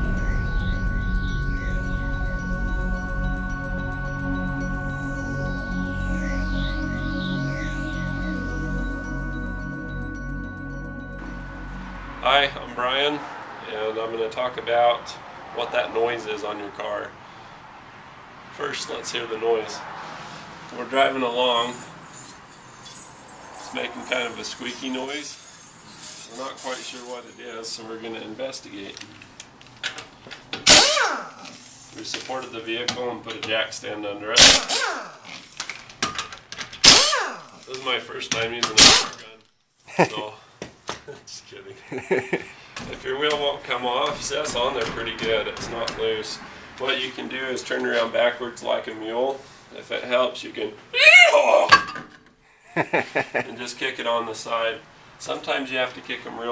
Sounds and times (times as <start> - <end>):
Speech: 12.2 - 17.2, 18.6 - 19.8, 20.8 - 21.8, 23.7 - 25.3, 26.3 - 29.1, 32.0 - 34.4, 37.7 - 39.4, 40.0 - 40.4, 41.1 - 41.8, 42.9 - 51.7, 53.4 - 56.5.